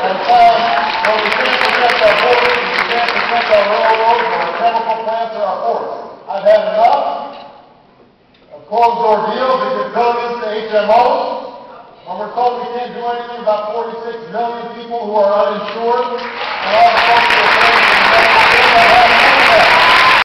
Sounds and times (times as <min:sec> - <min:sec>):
Male speech, man speaking: 0:00.0 - 0:07.4, 0:08.6 - 0:19.8
Narration, monologue: 0:00.0 - 0:19.6.